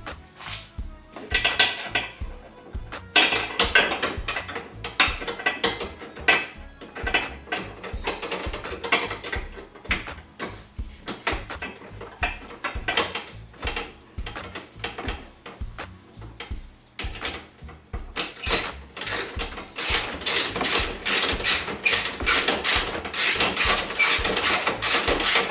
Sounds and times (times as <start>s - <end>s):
Cash register: 1.3s - 11.4s, 12.2s - 14.4s, 18.2s - 25.5s.